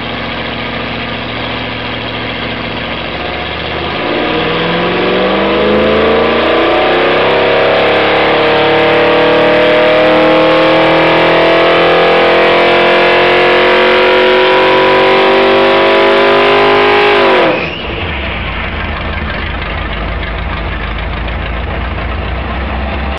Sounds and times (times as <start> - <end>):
Medium engine (mid frequency): 0.0 - 23.1.